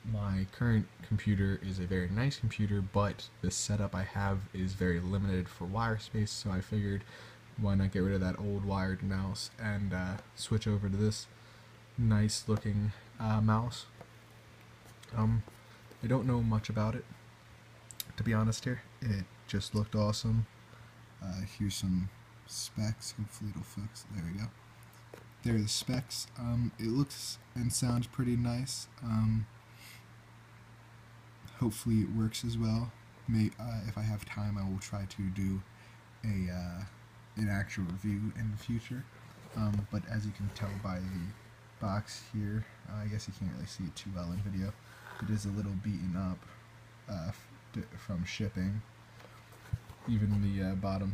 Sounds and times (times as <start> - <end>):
Speech: 0.0 - 11.3, 12.0 - 14.0, 15.1 - 17.2, 18.0 - 20.5, 21.2 - 24.6, 25.4 - 29.5, 31.5 - 48.9, 49.7 - 51.1.